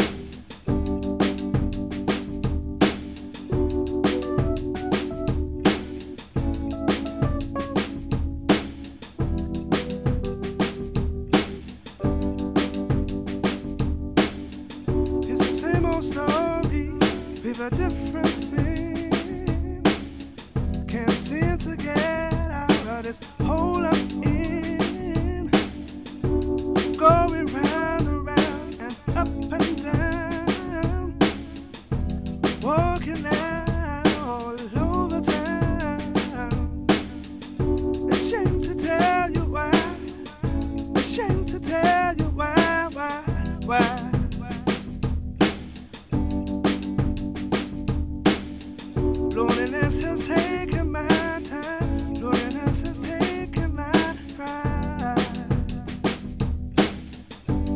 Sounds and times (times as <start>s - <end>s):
Music: 0.0s - 57.7s.